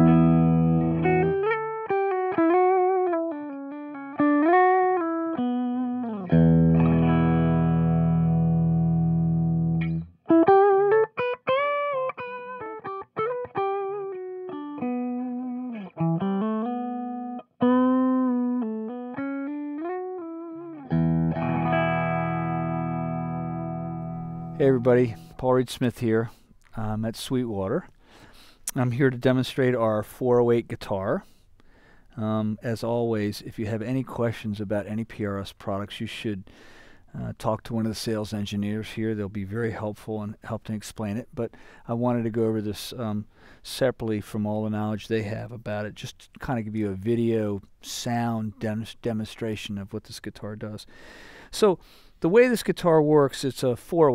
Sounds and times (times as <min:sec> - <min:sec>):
Music: 0:00.0 - 0:25.3
Speech: 0:24.6 - 0:27.9, 0:28.7 - 0:31.3, 0:32.2 - 0:36.5, 0:37.1 - 0:50.9, 0:51.5 - 0:54.1.